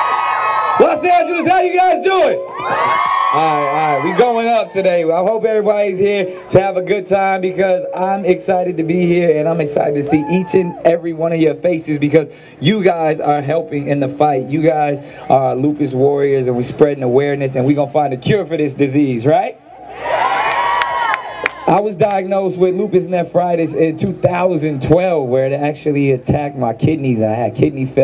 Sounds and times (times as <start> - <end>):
Male speech, man speaking: 0.8 - 2.4, 3.4 - 19.6, 21.7 - 28.0
Narration, monologue: 3.3 - 19.7, 21.7 - 28.0.